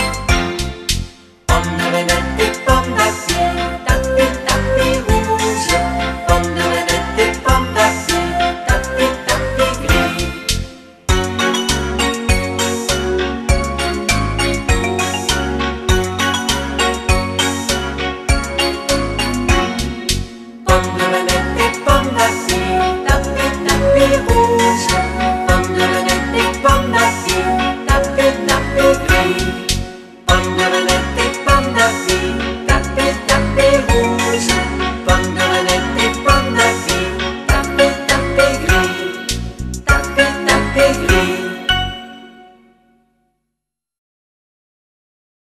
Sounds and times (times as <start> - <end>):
Music: 0.0 - 43.6.